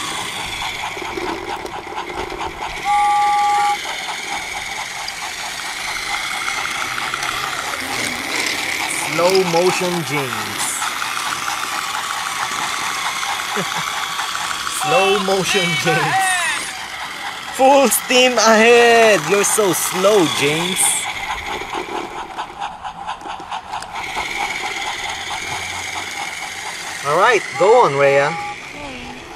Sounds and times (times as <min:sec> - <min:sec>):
Train: 0:00.0 - 0:29.3
Speech: 0:08.9 - 0:10.8, 0:14.7 - 0:16.7, 0:17.6 - 0:21.1, 0:27.0 - 0:29.2.